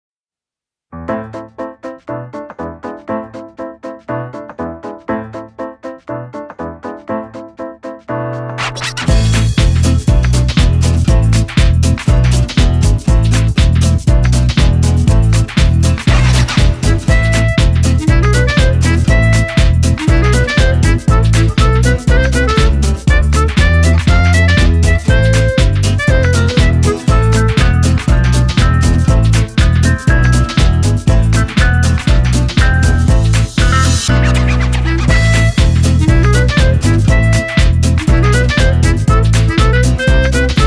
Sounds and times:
Electric piano: 0:01.0 - 0:40.6.

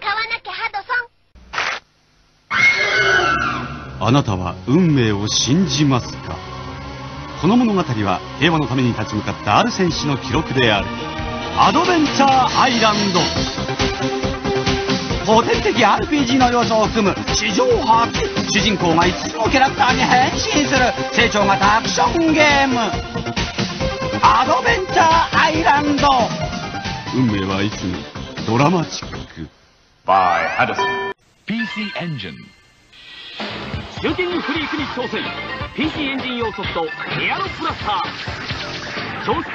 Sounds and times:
Music: 0:03.8 - 0:29.5, 0:33.0 - 0:39.5
Speech: 0:04.0 - 0:06.4, 0:15.3 - 0:23.0, 0:24.2 - 0:26.3, 0:34.0 - 0:38.1.

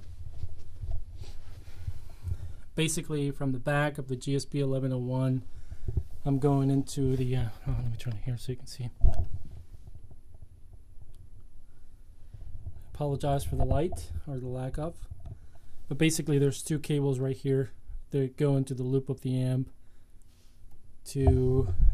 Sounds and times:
Speech: 0:02.8 - 0:05.5, 0:06.2 - 0:09.0, 0:12.9 - 0:15.1, 0:15.9 - 0:19.8, 0:21.0 - 0:21.9.

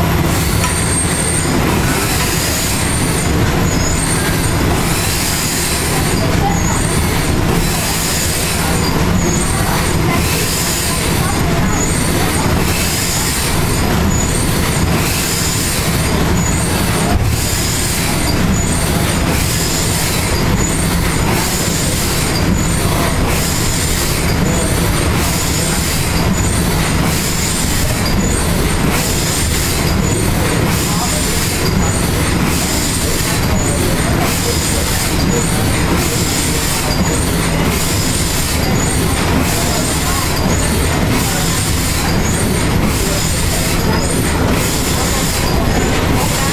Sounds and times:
Heavy engine (low frequency): 0:00.0 - 0:46.5.

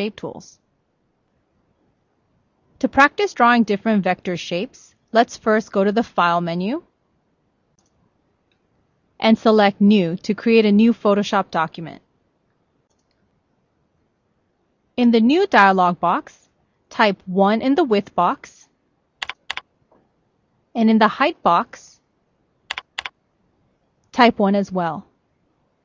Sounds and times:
Speech: 0:00.0 - 0:00.6, 0:02.8 - 0:06.8, 0:09.2 - 0:12.0, 0:15.0 - 0:16.3, 0:16.9 - 0:18.6, 0:20.8 - 0:22.0, 0:24.2 - 0:25.0.

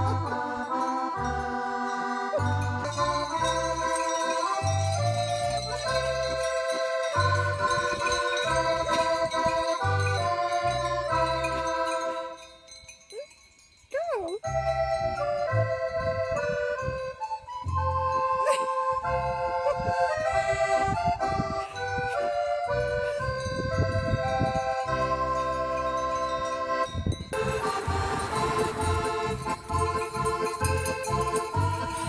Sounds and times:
Music: 0:00.0 - 0:13.0, 0:14.4 - 0:32.0.

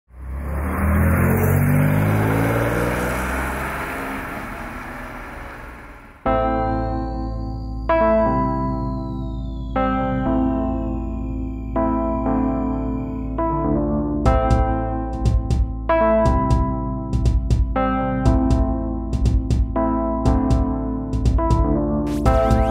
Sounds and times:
Outside, urban or manmade: 0:00.0 - 0:22.7
Accelerating, revving, vroom: 0:00.1 - 0:06.1
Medium engine (mid frequency): 0:00.1 - 0:06.3
Car: 0:00.1 - 0:06.4
Music: 0:06.3 - 0:22.7.

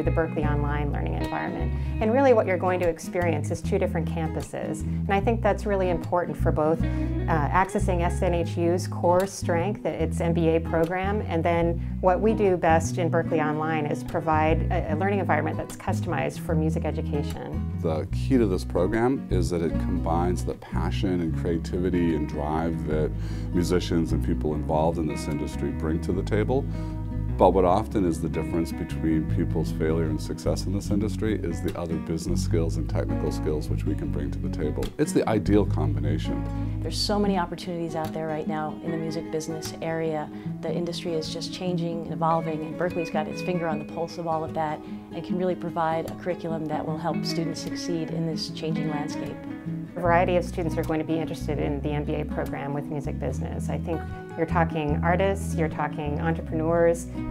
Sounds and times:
Speech: 0:00.0 - 0:26.6, 0:27.4 - 0:49.3
Background music: 0:00.0 - 0:57.3.

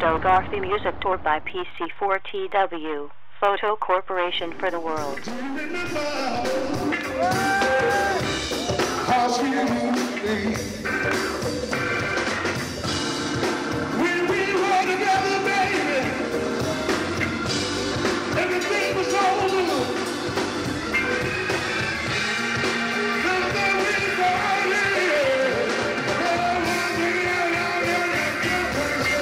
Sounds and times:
Music: 0:04.7 - 0:29.2.

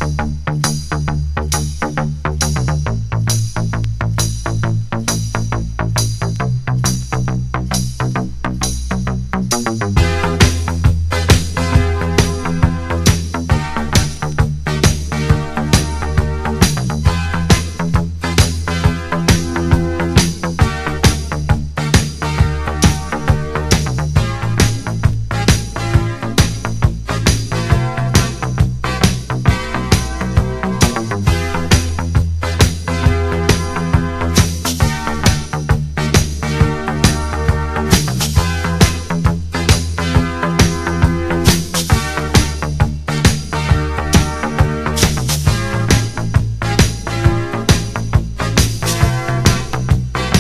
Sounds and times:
Music: 0:00.0 - 0:50.4.

